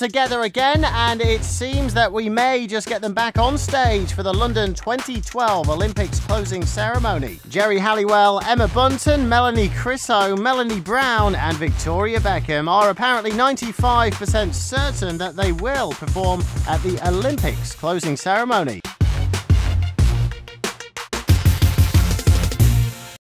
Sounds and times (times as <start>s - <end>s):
Speech: 0.0s - 18.9s
Music: 0.0s - 23.2s.